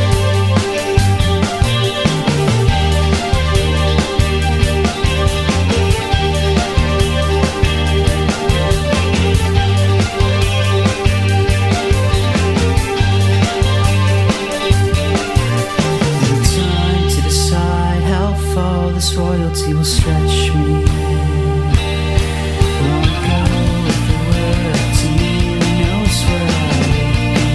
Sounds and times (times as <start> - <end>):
Progressive rock: 0.0 - 27.5.